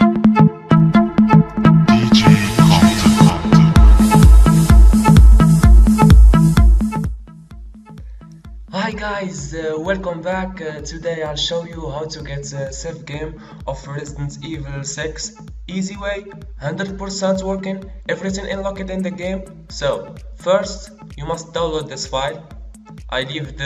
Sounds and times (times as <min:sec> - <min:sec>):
Music: 0:00.0 - 0:23.6
Speech: 0:01.9 - 0:03.6, 0:08.7 - 0:22.5, 0:23.1 - 0:23.6.